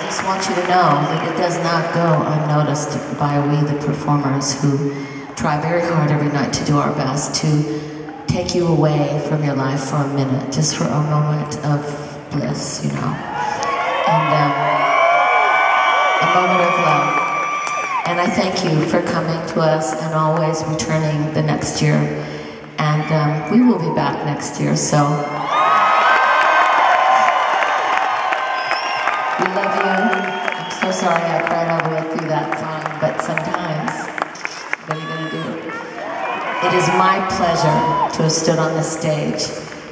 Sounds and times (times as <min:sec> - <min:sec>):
Female speech, woman speaking: 0:00.0 - 0:13.2, 0:14.1 - 0:14.7, 0:16.2 - 0:17.2, 0:18.1 - 0:22.2, 0:22.8 - 0:25.3, 0:29.4 - 0:34.1, 0:34.9 - 0:35.8, 0:36.6 - 0:39.5.